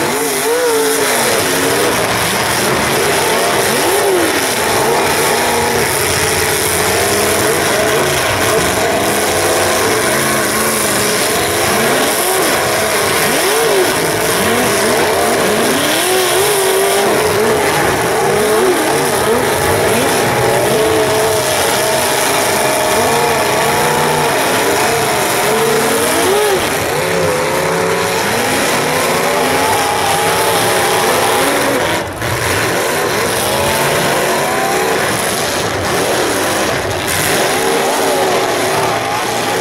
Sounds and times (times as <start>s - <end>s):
Car: 0.0s - 39.6s
Outside, urban or manmade: 0.0s - 39.6s.